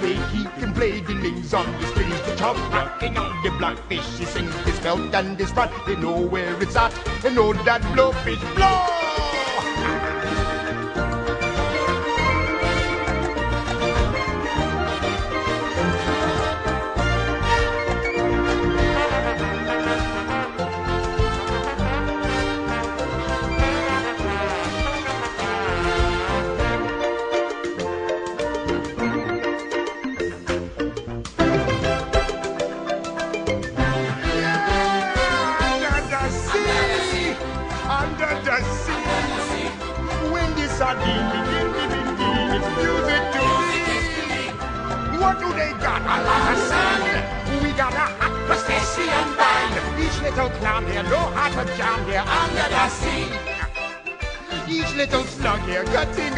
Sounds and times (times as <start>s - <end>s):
Funny music: 0.0s - 56.3s.